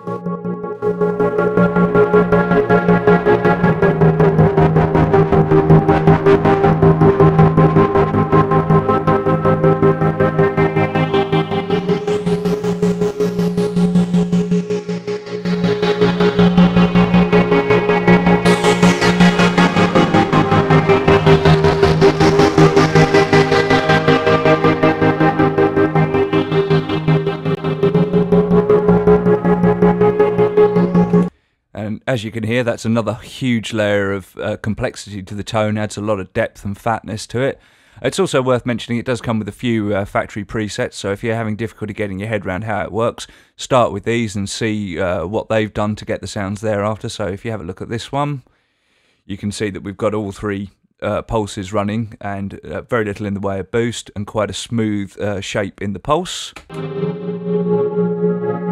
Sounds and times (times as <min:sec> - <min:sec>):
Music: 0:00.0 - 0:31.4, 0:56.6 - 0:58.7
Speech: 0:31.8 - 0:48.5, 0:49.3 - 0:56.6.